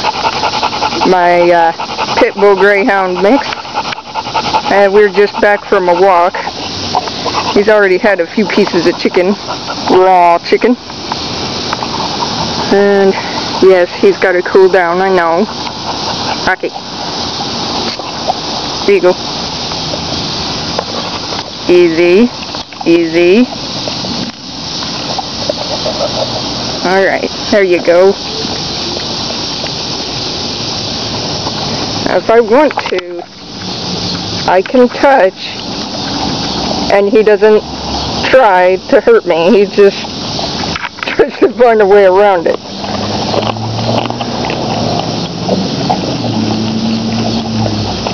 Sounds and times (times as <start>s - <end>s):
Dog: 0.0s - 10.0s, 11.7s - 14.1s, 24.9s - 26.6s.